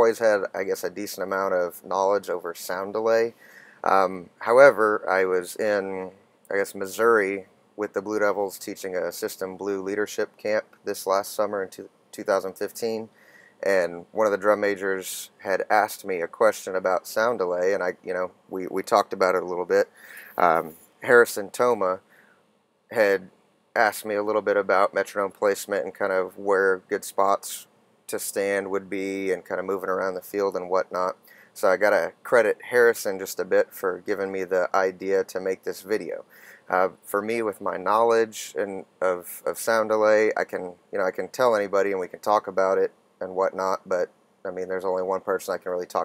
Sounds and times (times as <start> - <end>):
Speech: 0.0 - 22.0, 22.9 - 46.0.